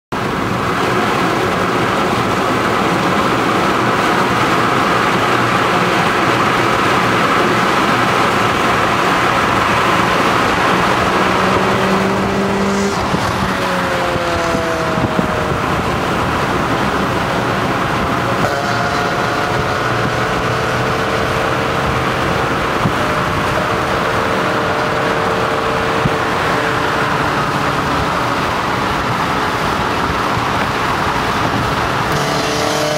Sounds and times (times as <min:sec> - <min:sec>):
Traffic noise, roadway noise: 0:00.0 - 0:32.9
Race car, auto racing: 0:00.1 - 0:32.9.